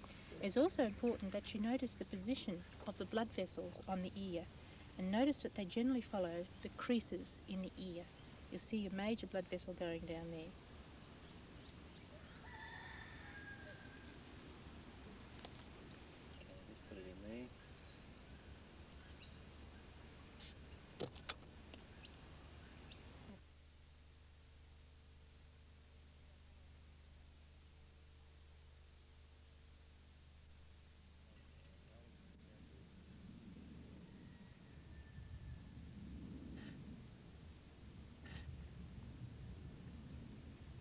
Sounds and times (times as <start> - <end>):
Speech: 0.3 - 10.5, 16.4 - 17.5.